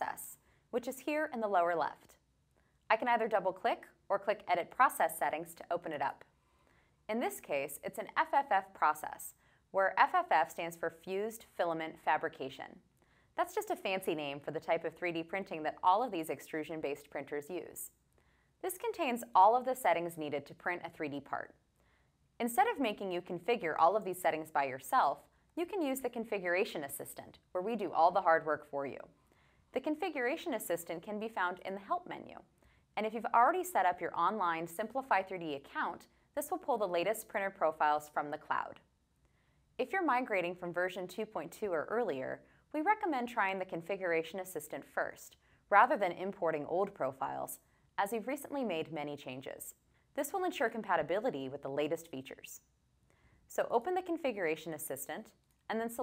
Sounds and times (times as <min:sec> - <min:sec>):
Speech: 0:00.0 - 0:02.2, 0:02.9 - 0:06.3, 0:07.1 - 0:12.8, 0:13.4 - 0:17.9, 0:18.6 - 0:21.6, 0:22.4 - 0:29.1, 0:29.8 - 0:38.8, 0:39.8 - 0:52.6, 0:53.5 - 0:56.0.